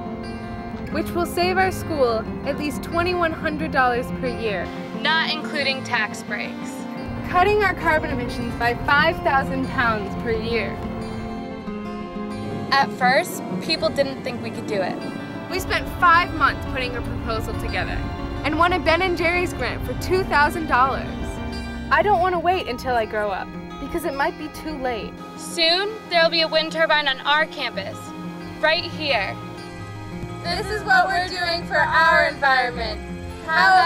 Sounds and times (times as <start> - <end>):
Music: 0.0 - 33.8.